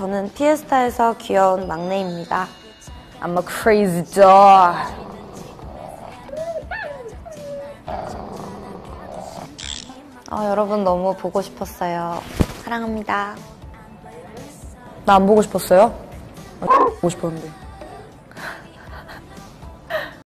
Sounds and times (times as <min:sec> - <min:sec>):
Music: 0:00.0 - 0:20.2
Speech: 0:03.2 - 0:05.2, 0:10.0 - 0:13.4, 0:15.0 - 0:16.0, 0:16.6 - 0:17.6.